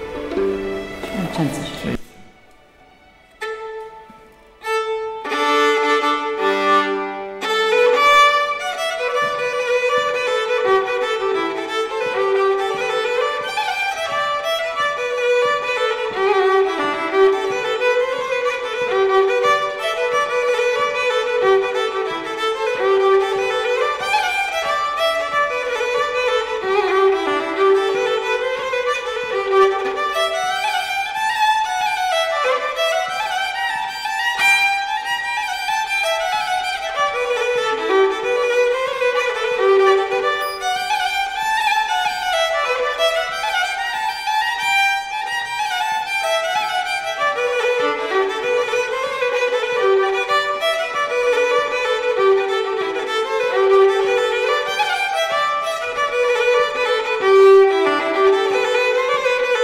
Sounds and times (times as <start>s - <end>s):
Violin, fiddle: 0.0s - 59.6s.